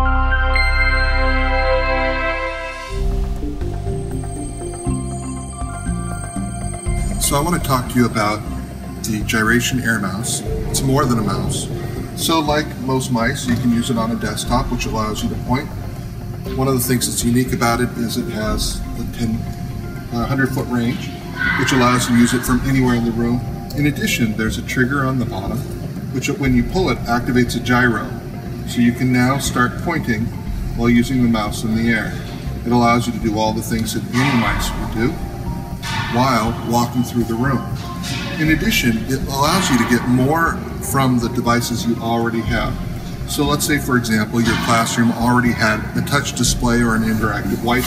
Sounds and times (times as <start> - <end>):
Music: 0.0 - 47.8
Speech: 7.2 - 15.8, 16.5 - 19.5, 20.1 - 35.2, 36.0 - 37.7, 38.3 - 47.8.